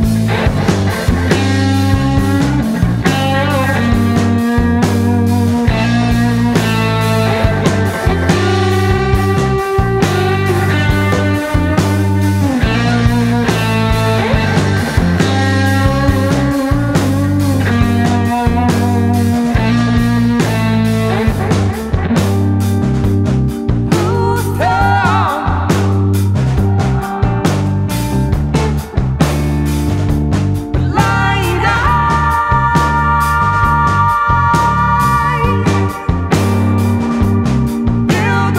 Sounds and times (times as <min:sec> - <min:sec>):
Psychedelic rock: 0:00.0 - 0:38.5.